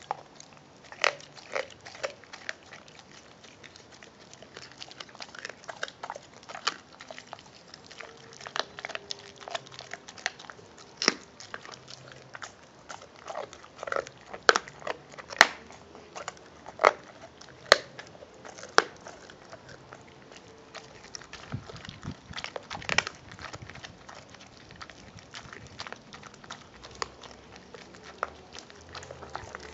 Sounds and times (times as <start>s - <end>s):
Biting: 0.0s - 29.7s
Canidae, dogs, wolves: 0.0s - 29.7s
Chewing, mastication: 0.0s - 29.7s
Crackle: 0.0s - 29.7s
Dog: 0.0s - 29.7s.